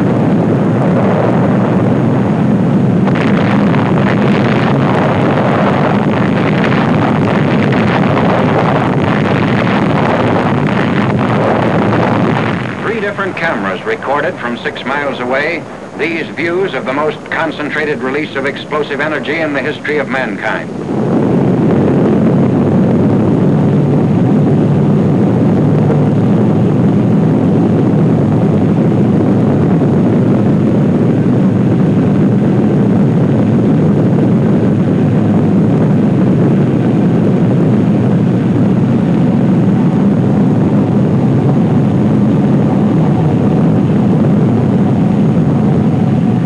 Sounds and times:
Explosion: 0:00.0 - 0:46.4
Speech: 0:12.8 - 0:20.7.

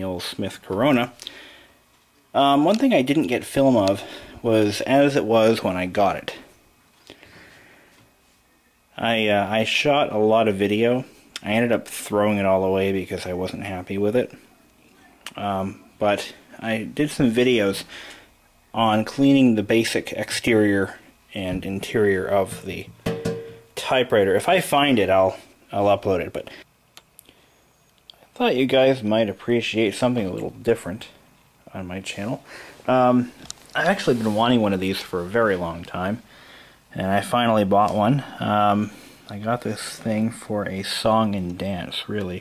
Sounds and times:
Speech: 0:00.0 - 0:01.2, 0:02.3 - 0:06.5, 0:08.4 - 0:17.9, 0:18.7 - 0:22.9, 0:23.8 - 0:26.6, 0:28.3 - 0:36.3, 0:36.9 - 0:42.4.

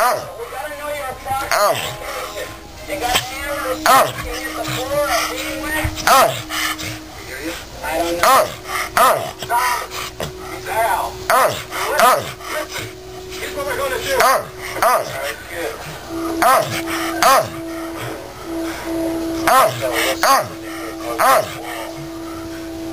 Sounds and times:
Speech: 0:00.0 - 0:06.4, 0:10.6 - 0:17.6, 0:19.4 - 0:22.1.

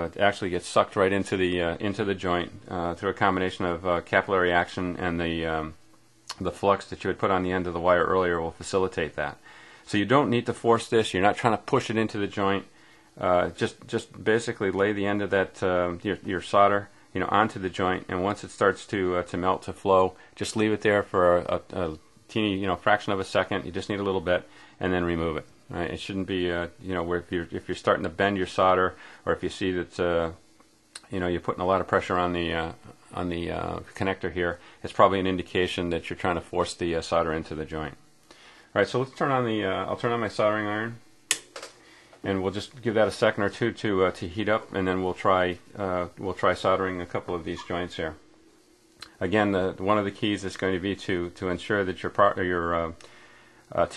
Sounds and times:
Speech: 0:00.0 - 0:38.0, 0:38.7 - 0:41.1, 0:42.2 - 0:48.2, 0:49.0 - 0:53.0, 0:53.7 - 0:53.9.

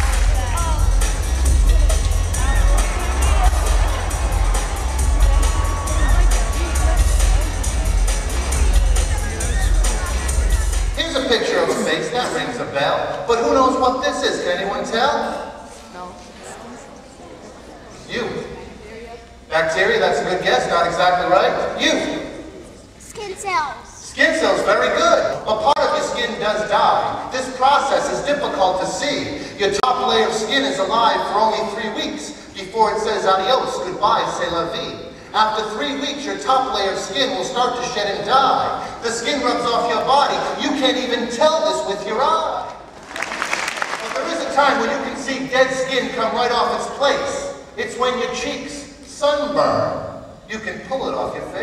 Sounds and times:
Music: 0:00.0 - 0:11.6
Male speech, man speaking: 0:10.9 - 0:15.6, 0:17.9 - 0:18.7, 0:19.5 - 0:22.4, 0:24.0 - 0:42.8, 0:44.0 - 0:51.6.

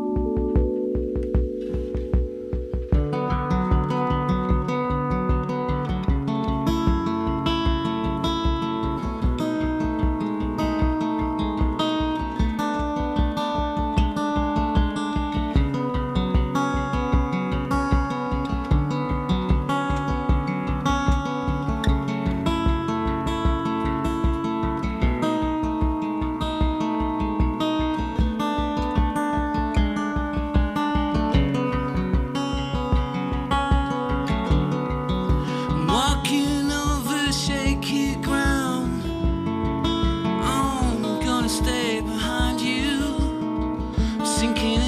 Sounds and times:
Music: 0:00.0 - 0:44.8.

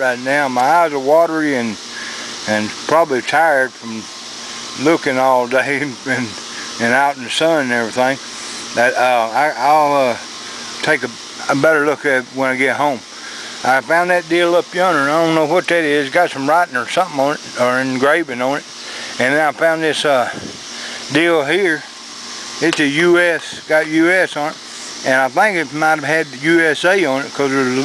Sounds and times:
Speech: 0:00.0 - 0:01.8, 0:02.5 - 0:04.1, 0:04.8 - 0:08.2, 0:08.8 - 0:10.2, 0:10.8 - 0:13.0, 0:13.6 - 0:20.4, 0:21.1 - 0:21.9, 0:22.6 - 0:27.8.

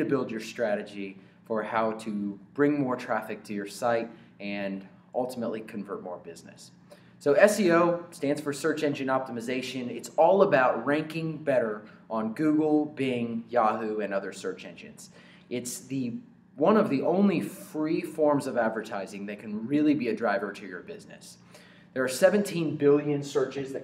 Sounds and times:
Speech: 0:00.0 - 0:21.4, 0:22.0 - 0:23.8.

